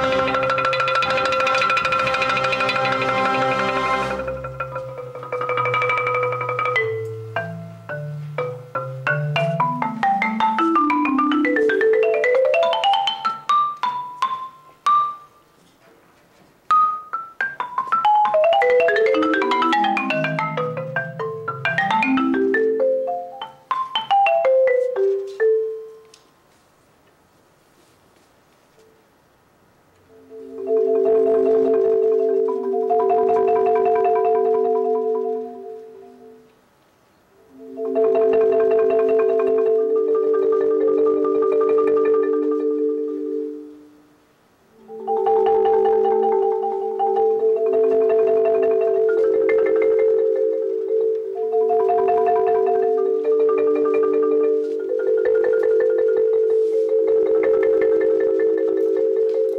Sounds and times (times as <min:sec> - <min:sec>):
Marimba, xylophone: 0:00.0 - 0:15.6, 0:16.7 - 0:26.2, 0:30.1 - 0:36.5, 0:37.4 - 0:44.1, 0:44.8 - 0:59.5.